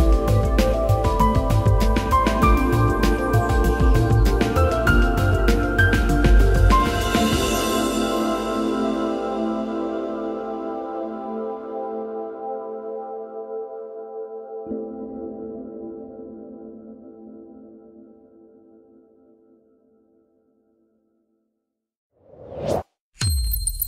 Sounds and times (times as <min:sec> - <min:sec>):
Ambient music: 0:00.0 - 0:19.5.